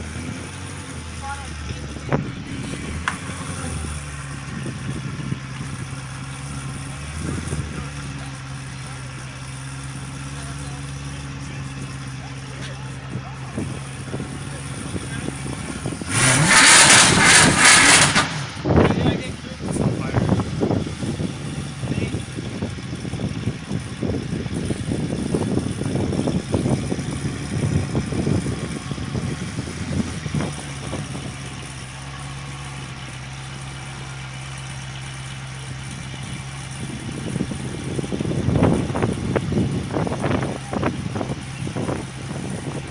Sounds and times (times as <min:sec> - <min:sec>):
Idling: 0:00.0 - 0:42.9
Vehicle: 0:00.0 - 0:42.9.